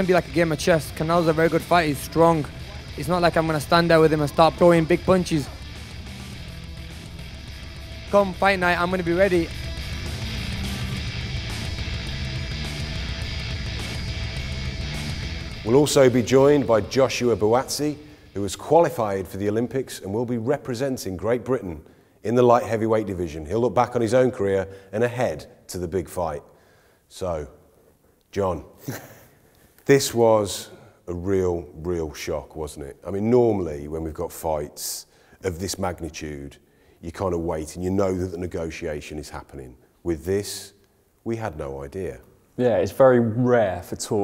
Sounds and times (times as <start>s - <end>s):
Speech: 0.0s - 5.6s, 8.1s - 9.5s, 15.6s - 26.5s, 27.1s - 27.6s, 28.3s - 28.8s, 29.8s - 44.2s
Music: 0.0s - 20.1s.